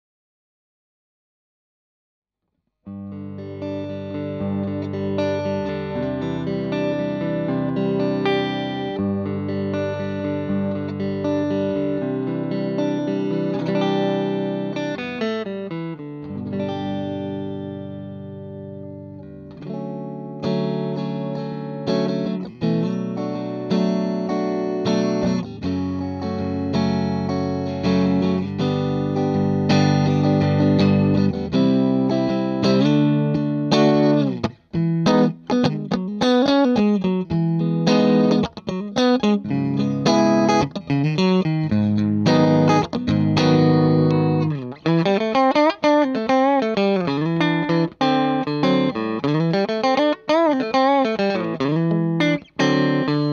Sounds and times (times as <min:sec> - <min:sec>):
Blues: 0:02.9 - 0:53.3.